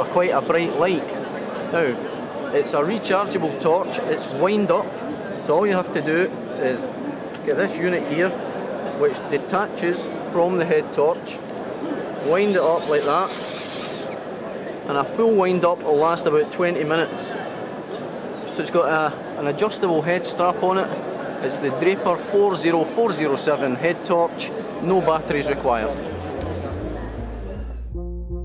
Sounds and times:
Speech: 0.0 - 11.4, 12.2 - 13.4, 14.8 - 17.5, 18.6 - 26.1.

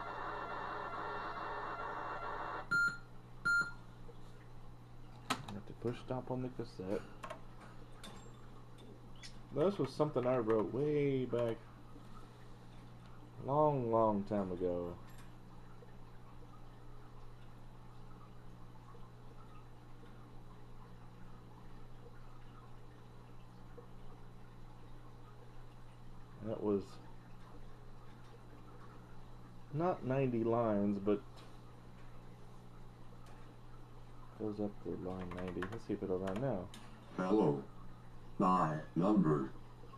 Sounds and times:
Speech: 5.5 - 7.1, 9.5 - 11.6, 13.4 - 15.0, 26.4 - 27.0, 29.7 - 31.3, 34.4 - 37.7, 38.4 - 39.6.

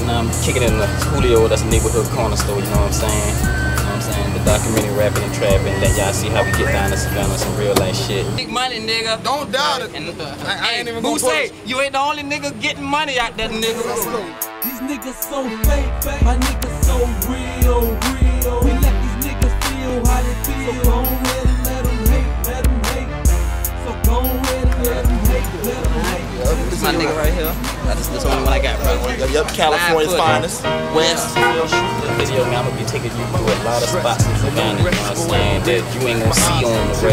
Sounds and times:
Music: 0.0 - 8.4, 13.3 - 37.1
Speech: 0.0 - 14.4, 26.0 - 37.1.

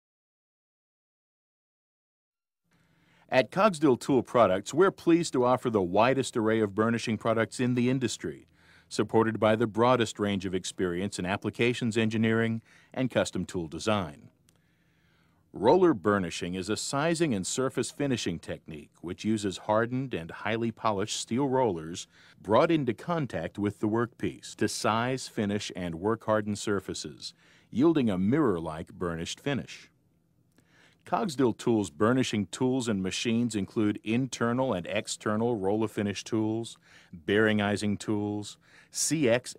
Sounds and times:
Speech: 3.3 - 14.4, 15.5 - 30.0, 31.1 - 39.5.

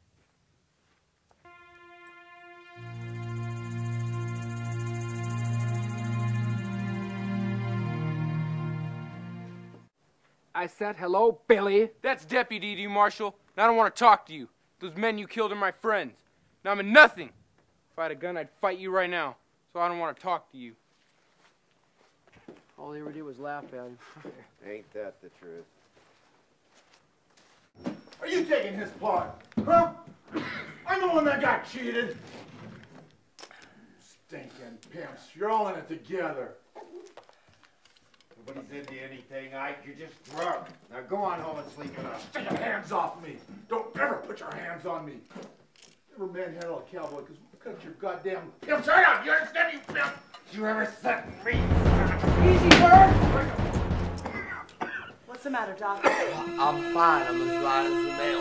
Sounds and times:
Speech: 10.6 - 17.3, 18.0 - 20.8, 22.8 - 25.7, 28.2 - 30.0, 30.9 - 32.2, 34.0 - 36.6, 38.4 - 45.3, 46.2 - 53.6, 55.3 - 58.4.

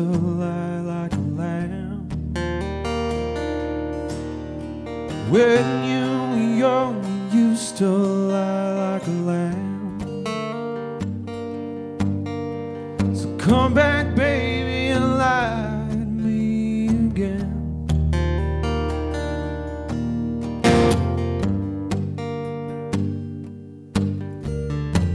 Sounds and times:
Music: 0.0 - 25.1.

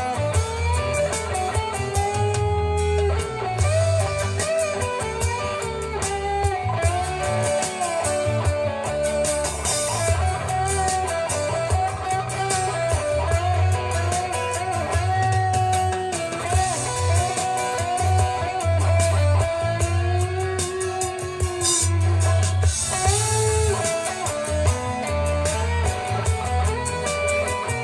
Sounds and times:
Bass guitar: 0.0 - 27.8.

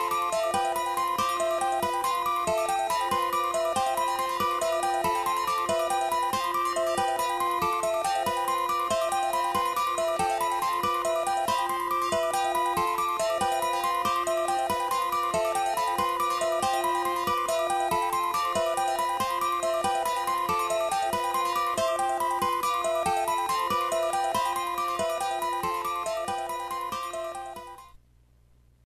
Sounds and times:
Music: 0.0 - 28.0.

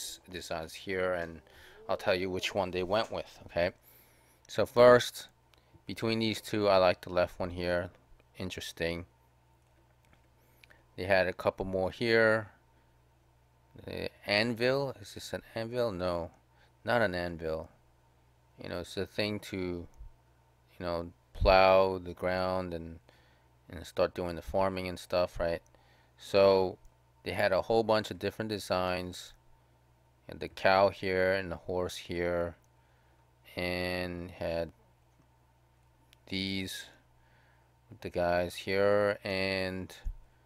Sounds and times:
Speech: 0.0 - 3.8, 4.5 - 5.3, 5.9 - 9.1, 11.0 - 12.6, 13.8 - 17.7, 18.6 - 19.9, 20.7 - 23.0, 23.7 - 25.6, 26.2 - 29.4, 30.3 - 32.6, 33.5 - 34.8, 36.3 - 37.0, 37.9 - 40.2.

